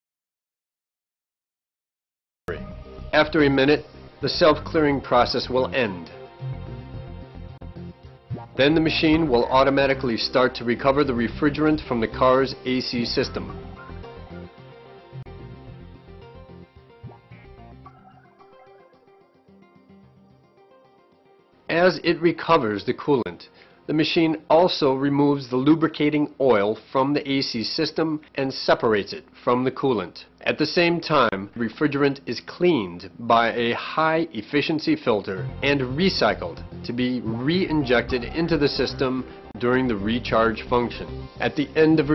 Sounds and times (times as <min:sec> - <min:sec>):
Speech: 0:03.2 - 0:06.2, 0:08.6 - 0:13.6, 0:21.7 - 0:42.1.